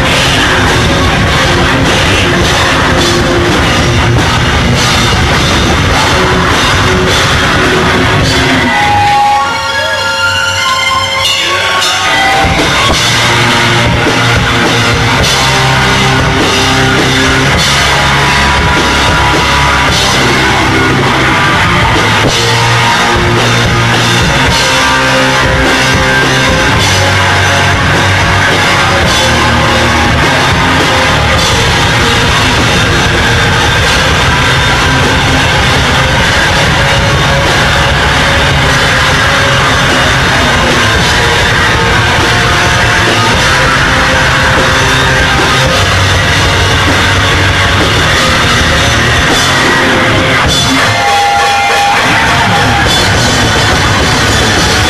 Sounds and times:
Heavy metal: 0:00.0 - 0:54.8.

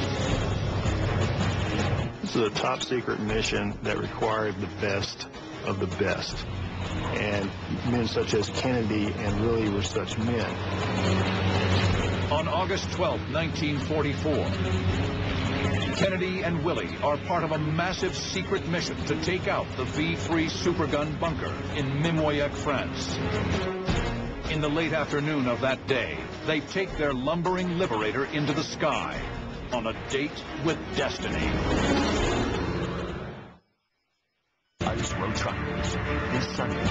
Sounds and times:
Fixed-wing aircraft, airplane: 0:00.0 - 0:02.2, 0:06.4 - 0:23.6
Speech: 0:02.2 - 0:06.4, 0:07.1 - 0:10.6, 0:24.5 - 0:31.6, 0:34.8 - 0:35.7.

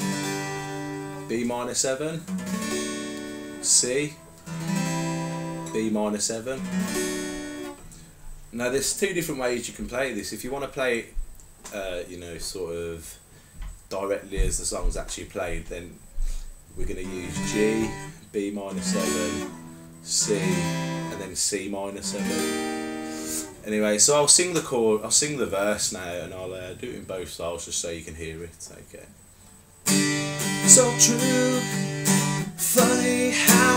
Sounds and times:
Strum: 0:00.0 - 0:10.1, 0:16.8 - 0:24.6, 0:29.8 - 0:33.7
Speech: 0:01.3 - 0:02.3, 0:03.6 - 0:04.2, 0:05.7 - 0:06.7, 0:08.5 - 0:13.2, 0:13.9 - 0:16.0, 0:16.8 - 0:19.5, 0:20.1 - 0:22.4, 0:23.6 - 0:29.2.

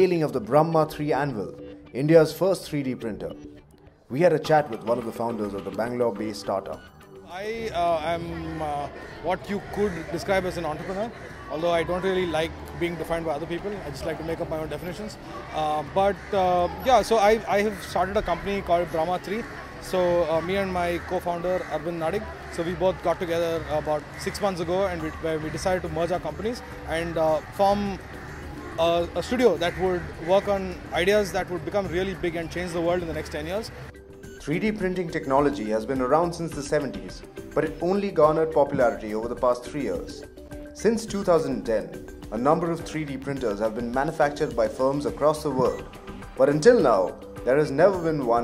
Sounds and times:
Speech: 0:04.1 - 0:28.0, 0:34.5 - 0:40.2, 0:40.8 - 0:45.8, 0:46.4 - 0:48.4.

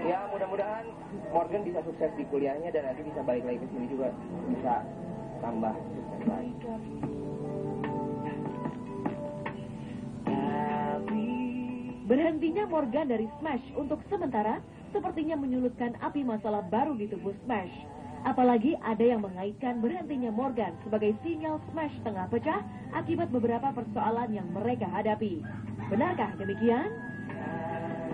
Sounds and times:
Male speech, man speaking: 0:00.0 - 0:06.9
Music: 0:00.0 - 0:28.1.

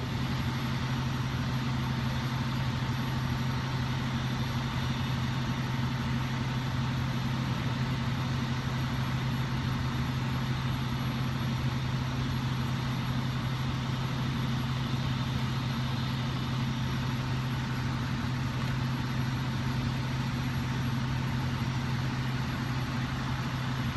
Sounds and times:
Vehicle: 0:00.0 - 0:23.9.

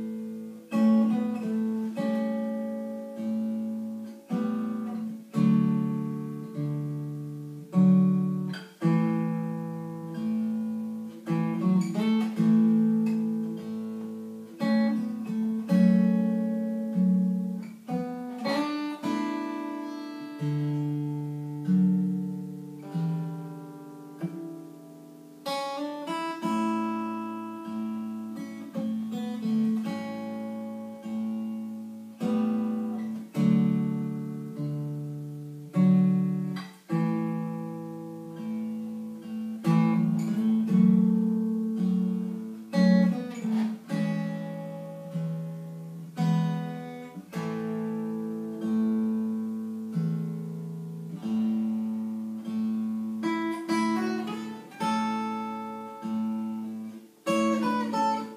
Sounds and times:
Acoustic guitar: 0:00.0 - 0:58.3.

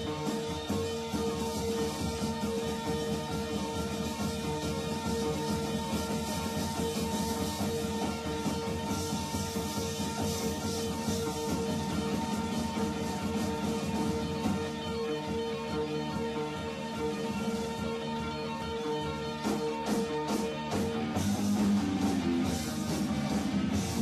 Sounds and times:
Music: 0:00.0 - 0:24.0.

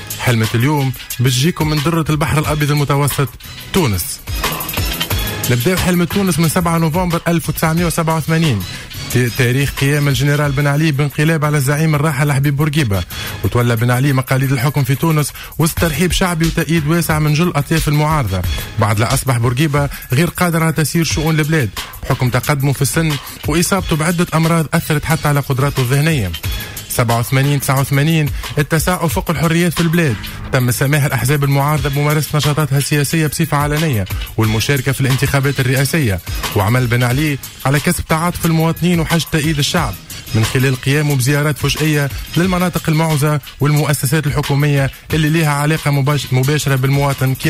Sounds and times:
Music: 0:00.0 - 0:47.5
Speech: 0:00.2 - 0:04.2, 0:05.4 - 0:47.5.

